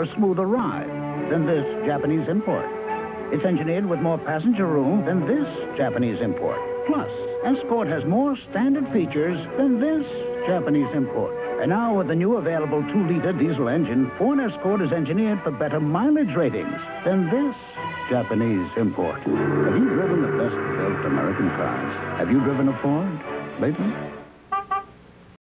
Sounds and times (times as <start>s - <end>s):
Speech: 0.0s - 2.7s, 3.4s - 24.0s
Music: 0.0s - 25.4s.